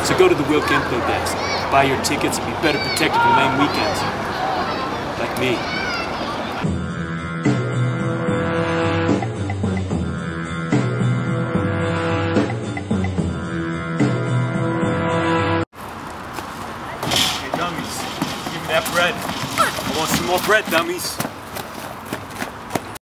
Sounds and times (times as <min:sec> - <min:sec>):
Speech: 0:00.0 - 0:05.8, 0:19.9 - 0:21.2
Music: 0:06.6 - 0:15.6.